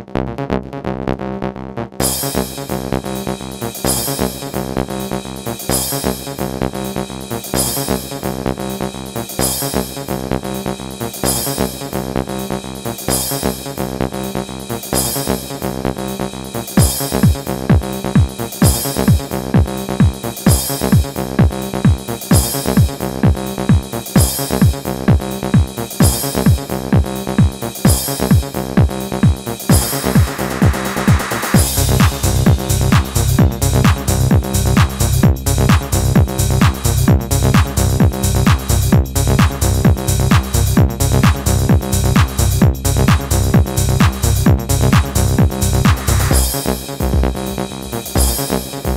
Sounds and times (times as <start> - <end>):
Music: 0.0 - 48.9.